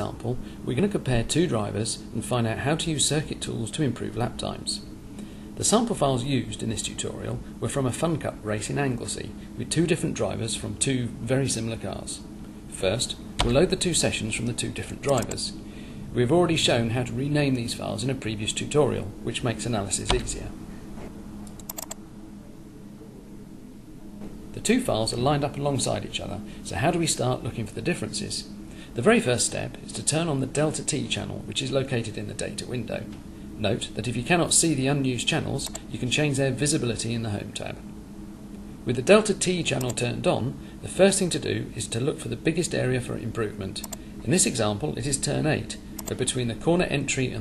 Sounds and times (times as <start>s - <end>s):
Speech: 0.0s - 4.9s, 5.6s - 20.6s, 24.5s - 37.9s, 38.8s - 47.4s.